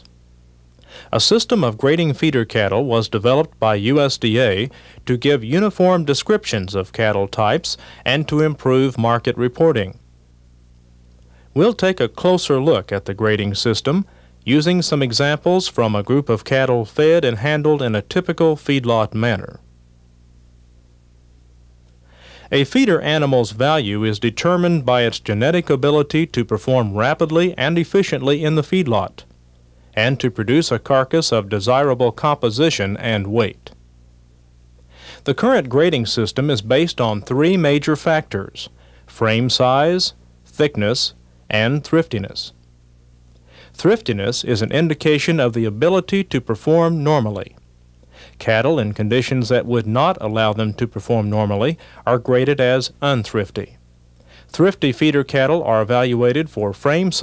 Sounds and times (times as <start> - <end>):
Speech: 1.1 - 10.0, 11.6 - 19.7, 22.5 - 29.3, 30.0 - 33.8, 35.2 - 42.6, 43.8 - 47.6, 48.4 - 53.8, 54.5 - 57.2.